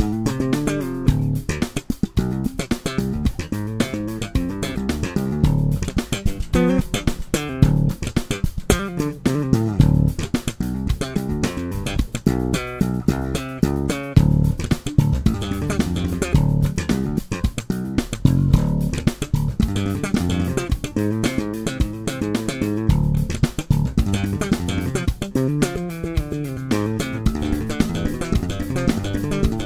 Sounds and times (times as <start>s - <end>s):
Bass guitar: 0.0s - 29.6s.